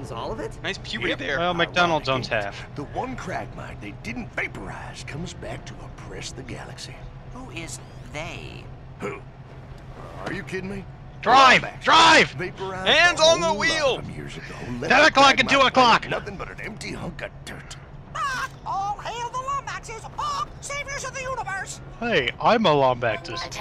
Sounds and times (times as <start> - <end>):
Speech: 0.0 - 9.2, 10.0 - 23.6.